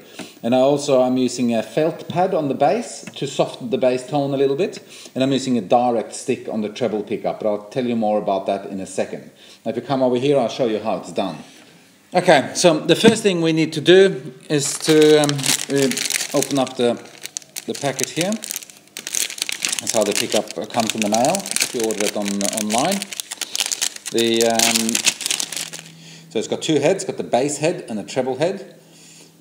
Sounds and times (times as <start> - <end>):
Speech: 0.4 - 11.5, 12.1 - 17.1, 17.7 - 18.5, 19.8 - 23.1, 24.1 - 25.0, 26.3 - 28.8.